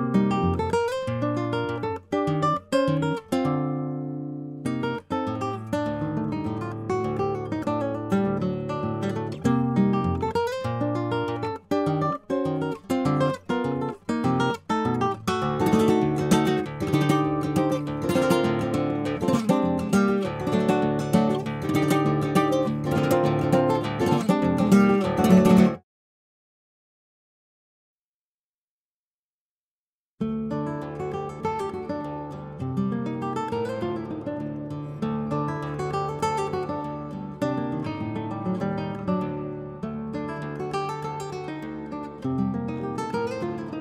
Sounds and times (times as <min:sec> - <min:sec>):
Acoustic guitar: 0:00.0 - 0:25.8, 0:30.2 - 0:43.8.